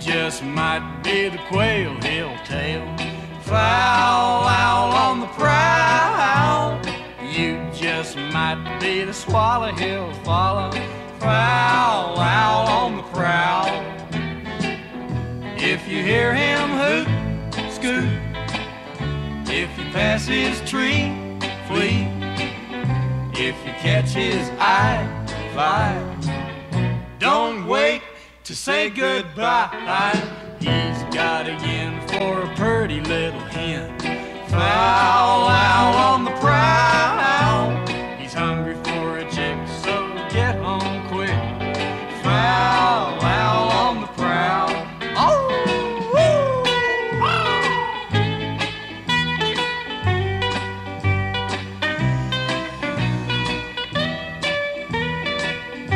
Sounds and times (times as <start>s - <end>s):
Music: 0.0s - 55.9s.